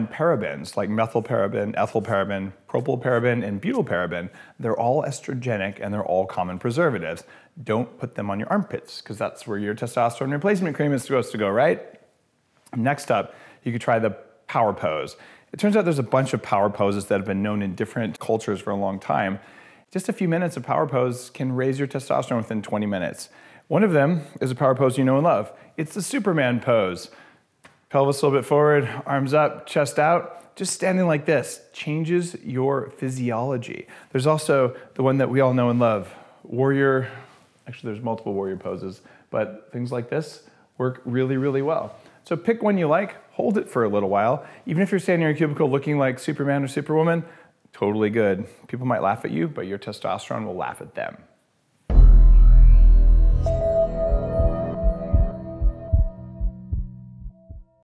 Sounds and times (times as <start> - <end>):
Male speech, man speaking: 0.0 - 11.9, 12.7 - 27.1, 27.9 - 51.3
Music: 51.9 - 57.8.